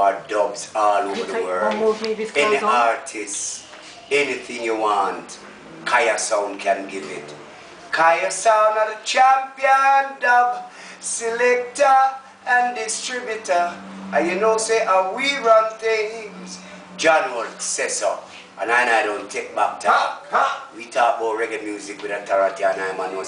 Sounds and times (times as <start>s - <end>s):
Speech: 0.0s - 23.2s.